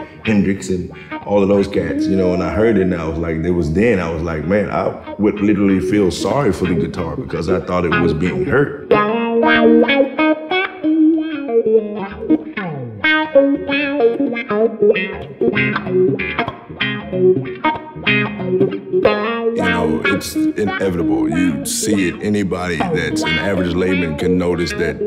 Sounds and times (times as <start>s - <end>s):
Speech: 0.0s - 8.8s, 19.6s - 25.0s
Music: 0.0s - 25.0s.